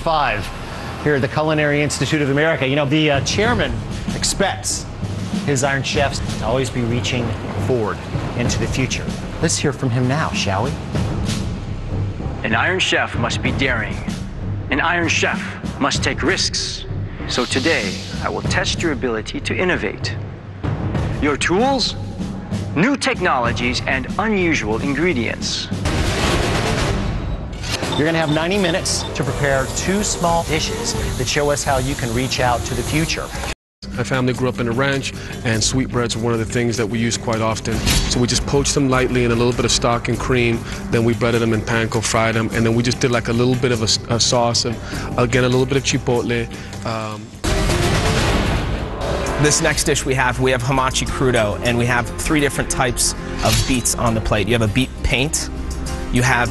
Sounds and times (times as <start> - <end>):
Speech: 0.0 - 4.8, 5.5 - 10.8, 12.4 - 14.1, 14.7 - 20.2, 21.2 - 22.0, 22.8 - 25.8, 28.0 - 33.3, 33.9 - 47.4, 49.4 - 55.5, 56.1 - 56.5
Music: 0.0 - 56.5.